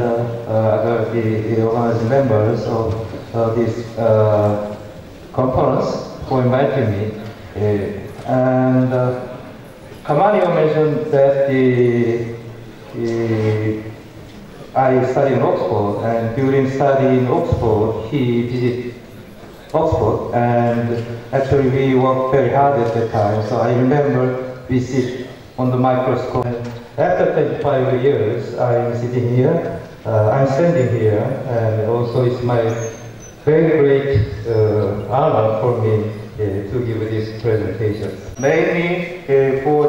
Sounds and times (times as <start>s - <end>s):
Speech: 0.0s - 9.4s, 10.0s - 14.0s, 14.6s - 19.0s, 19.7s - 39.8s.